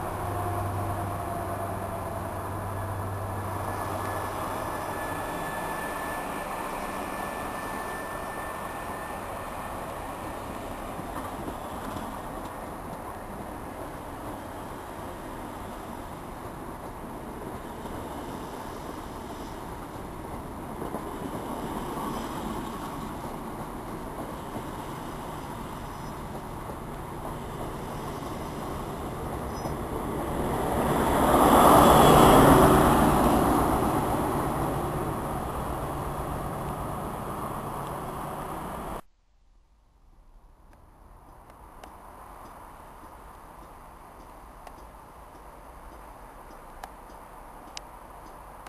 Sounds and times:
Train: 0.0s - 39.1s, 40.6s - 48.6s
Outside, urban or manmade: 0.0s - 48.6s.

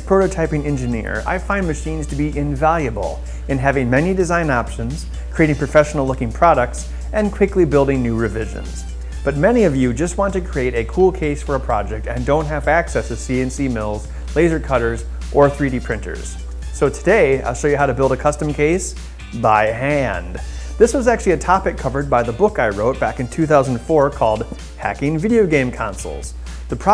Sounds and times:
Music: 0.0s - 26.9s
Speech: 0.0s - 26.9s.

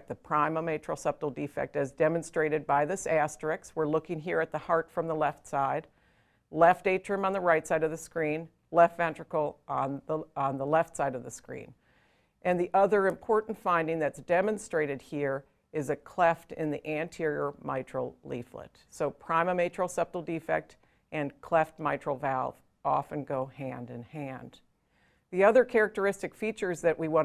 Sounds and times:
Speech: 0.0s - 5.9s, 6.6s - 11.8s, 12.5s - 24.6s, 25.4s - 27.2s.

